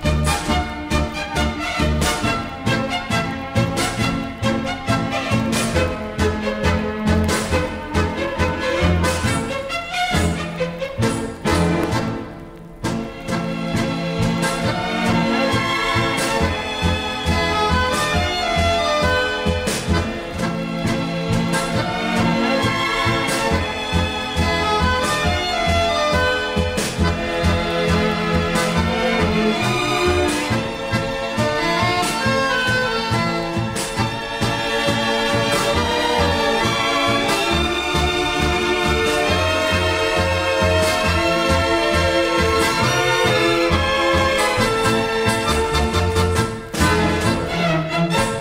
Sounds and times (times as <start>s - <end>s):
Music: 0.0s - 48.4s.